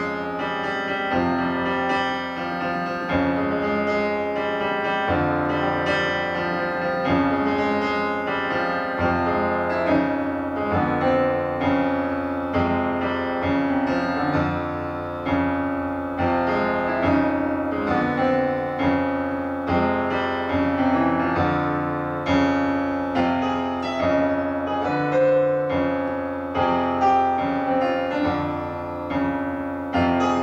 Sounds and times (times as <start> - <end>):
Music: 0.0 - 30.4.